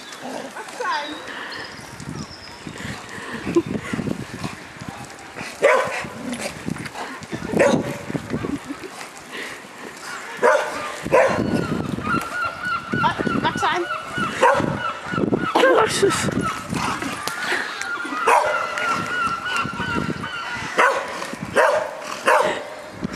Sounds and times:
Bow-wow: 5.6s - 6.1s, 10.4s - 11.6s, 14.4s - 14.8s, 18.2s - 18.9s, 20.8s - 22.7s.

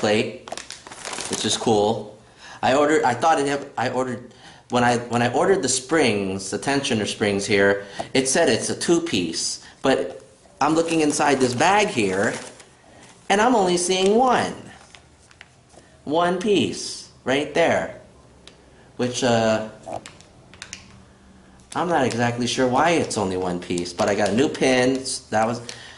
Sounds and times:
Speech: 0.0s - 0.5s, 1.3s - 12.6s, 13.3s - 14.8s, 16.1s - 18.1s, 19.0s - 20.0s, 21.8s - 25.7s
Inside, small room: 0.0s - 25.9s.

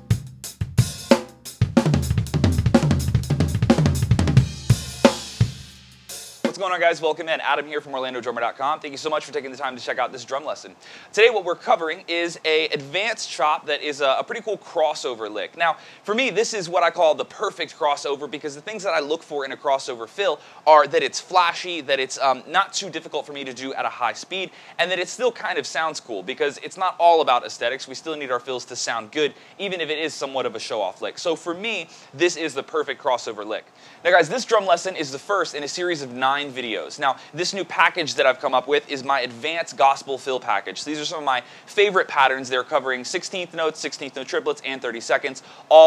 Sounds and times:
Speech: 6.5s - 45.8s.

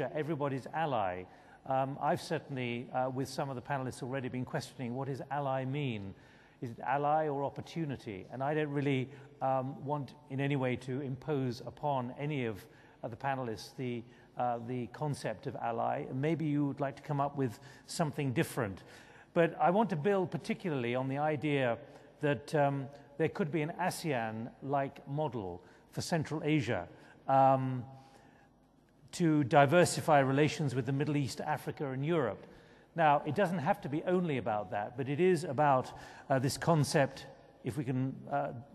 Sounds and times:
Speech: 0.0s - 27.9s, 29.1s - 38.7s.

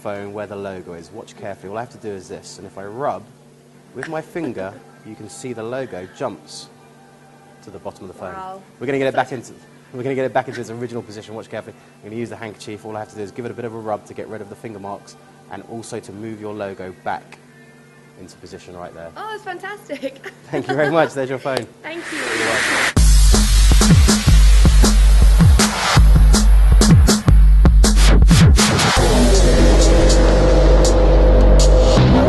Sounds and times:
Music: 0.0s - 20.9s, 21.7s - 32.2s.

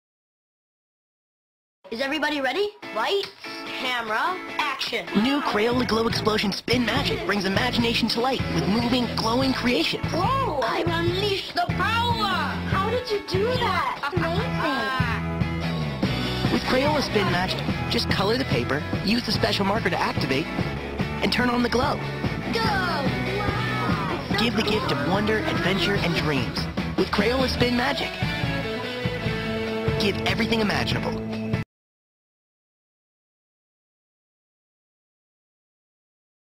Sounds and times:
Music: 1.9s - 31.7s
Speech: 24.3s - 28.1s, 30.0s - 31.2s.

